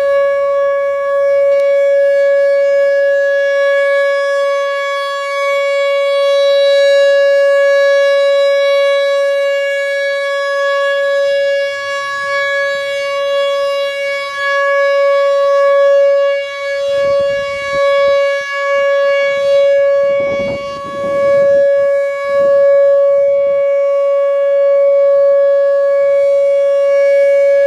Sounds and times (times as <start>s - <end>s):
Civil defense siren: 0.0s - 27.6s.